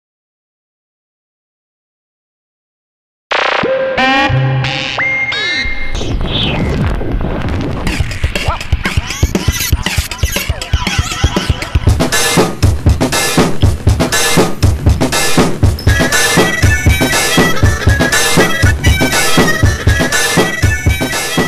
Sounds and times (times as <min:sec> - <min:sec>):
Music: 0:03.6 - 0:06.8, 0:07.7 - 0:21.4.